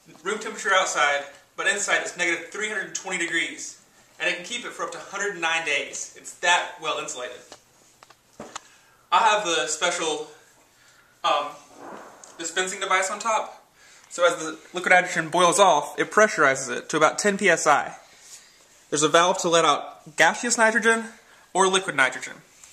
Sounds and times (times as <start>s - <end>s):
Speech: 0.0s - 7.5s, 9.1s - 10.4s, 11.2s - 11.7s, 12.4s - 18.0s, 18.9s - 22.5s.